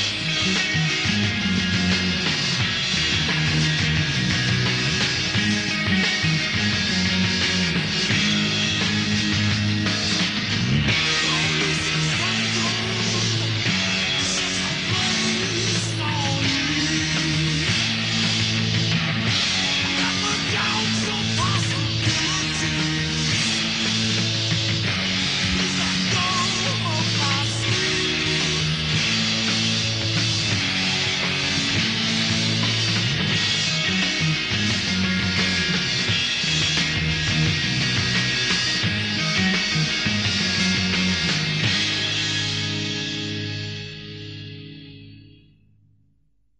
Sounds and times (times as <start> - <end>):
Punk rock: 0.0 - 44.9.